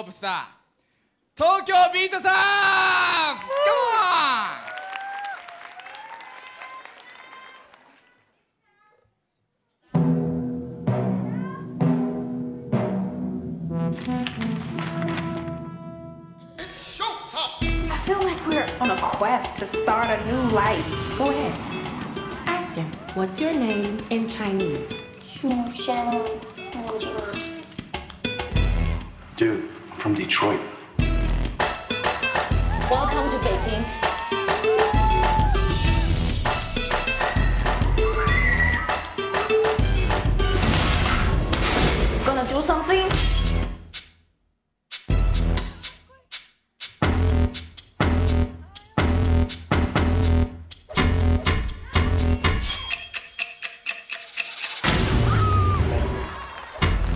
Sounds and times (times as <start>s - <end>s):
Timpani: 10.0s - 16.6s.